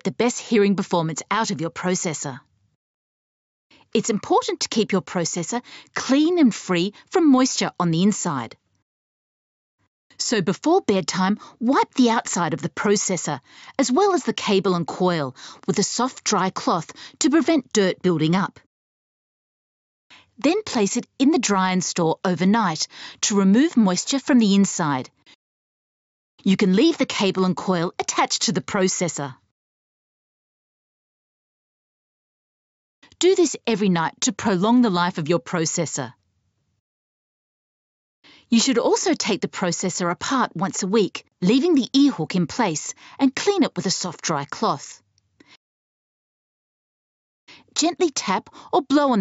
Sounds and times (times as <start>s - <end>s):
Speech: 0.0s - 2.4s, 3.9s - 8.6s, 10.2s - 18.6s, 20.4s - 25.1s, 26.4s - 29.4s, 33.2s - 36.2s, 38.5s - 45.0s, 47.8s - 49.2s.